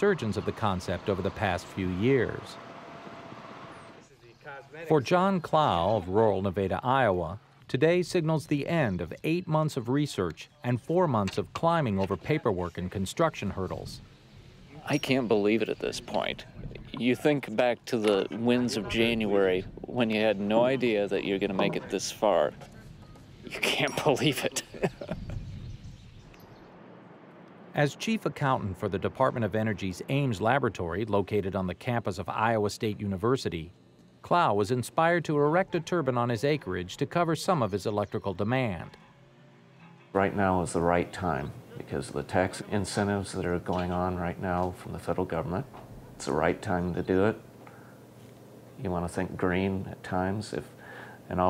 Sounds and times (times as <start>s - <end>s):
Speech: 0.0s - 2.6s, 4.1s - 14.0s, 14.7s - 22.6s, 23.5s - 24.8s, 27.8s - 39.0s, 40.2s - 47.4s, 48.8s - 50.7s, 51.3s - 51.4s.